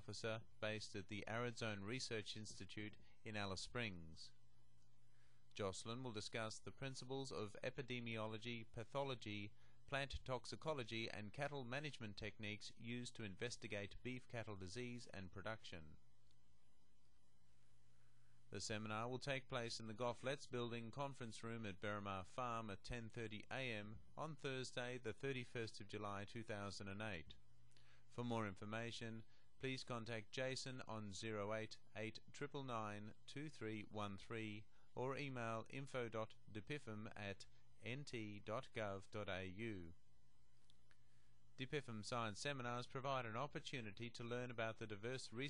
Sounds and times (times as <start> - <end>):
Speech: 0.0 - 4.4, 5.5 - 16.0, 18.5 - 27.4, 28.1 - 40.0, 41.6 - 45.5.